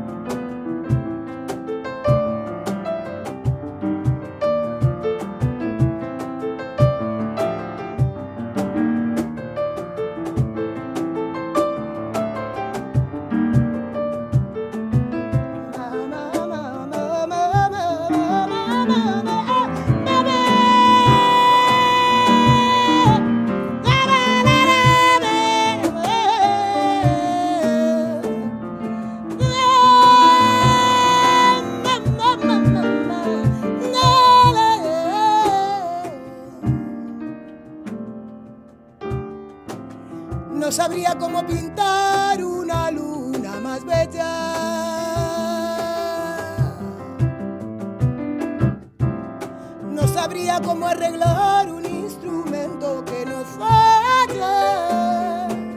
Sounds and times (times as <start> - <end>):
Music: 0.0 - 55.7.